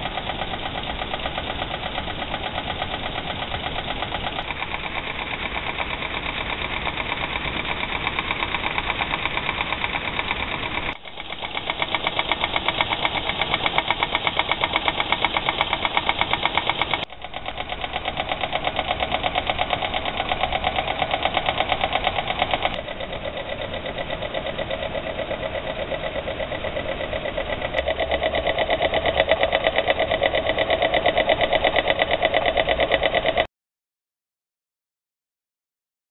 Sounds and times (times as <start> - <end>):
Idling: 0.0 - 33.5.